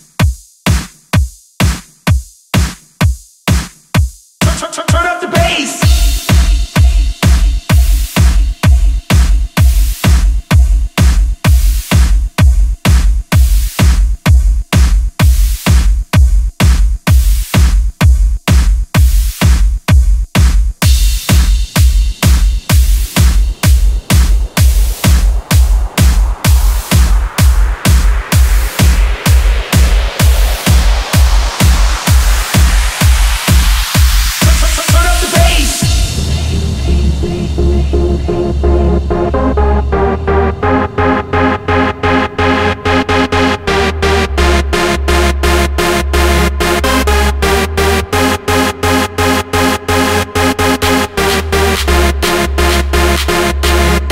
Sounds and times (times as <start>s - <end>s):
Exciting music: 4.4s - 17.8s, 20.8s - 54.1s.